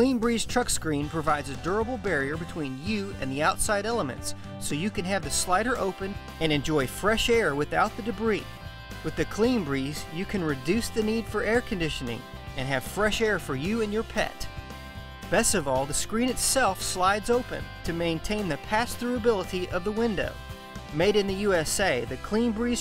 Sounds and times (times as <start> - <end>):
Speech: 0.0 - 14.5, 15.3 - 22.8
Music: 0.0 - 22.8.